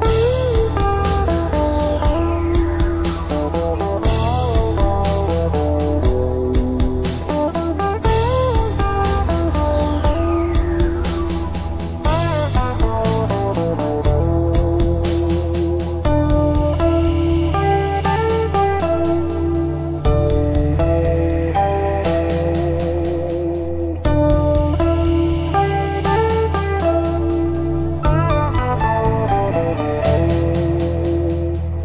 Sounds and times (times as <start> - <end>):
Acoustic guitar: 0.0 - 31.8
Strum: 0.0 - 31.8.